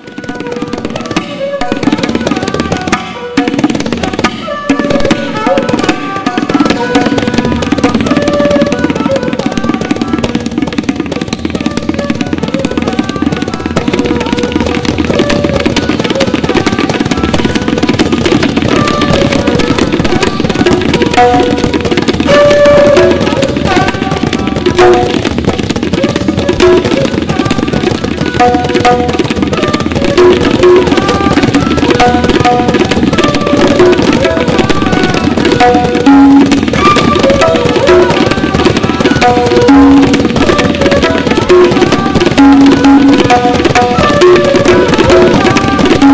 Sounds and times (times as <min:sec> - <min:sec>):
Percussion: 0:00.0 - 0:46.1.